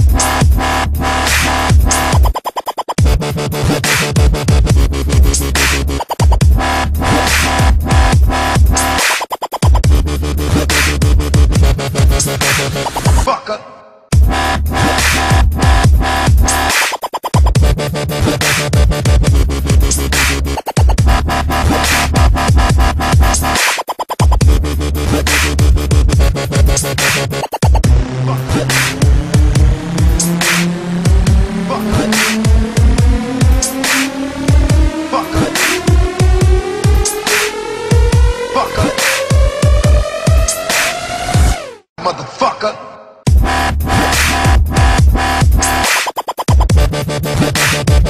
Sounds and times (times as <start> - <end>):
Dubstep: 0.0 - 13.4, 14.1 - 48.0.